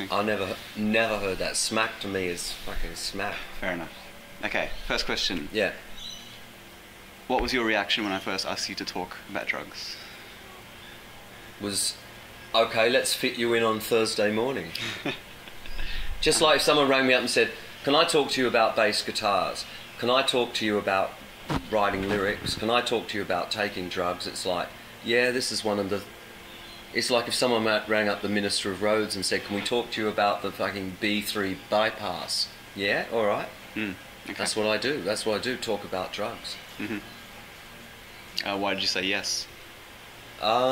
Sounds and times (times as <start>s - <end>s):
Speech: 0.0s - 5.8s, 7.3s - 10.0s, 11.6s - 12.0s, 12.6s - 14.8s, 16.2s - 26.1s, 27.0s - 37.0s, 38.4s - 39.5s, 40.4s - 40.7s.